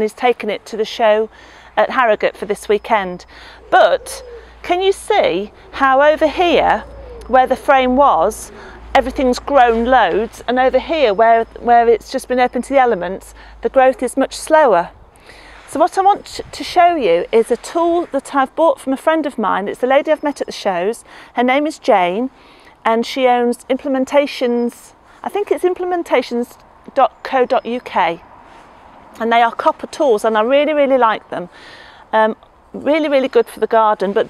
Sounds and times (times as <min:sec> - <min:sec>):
Speech: 0:00.0 - 0:14.9, 0:15.7 - 0:28.2, 0:29.2 - 0:31.5, 0:32.1 - 0:34.2.